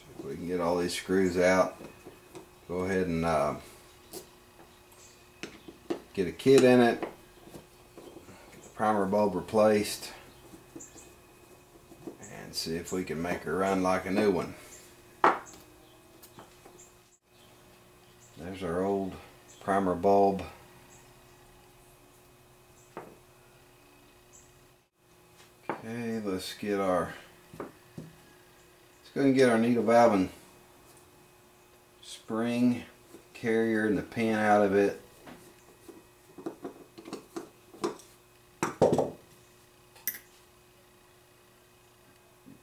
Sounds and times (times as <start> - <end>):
Speech: 0.2 - 1.8, 2.7 - 3.6, 6.1 - 7.0, 8.8 - 10.2, 12.2 - 14.6, 18.4 - 20.6, 25.8 - 27.3, 29.0 - 30.4, 32.0 - 35.0.